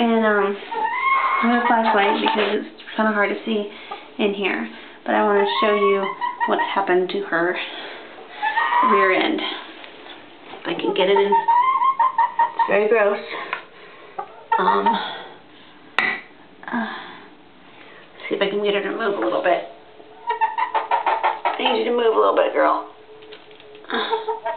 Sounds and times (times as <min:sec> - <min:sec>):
Speech: 0:00.0 - 0:00.6, 0:01.4 - 0:07.8, 0:08.8 - 0:09.7, 0:10.6 - 0:11.5, 0:12.7 - 0:13.4, 0:18.2 - 0:19.7, 0:21.6 - 0:22.9.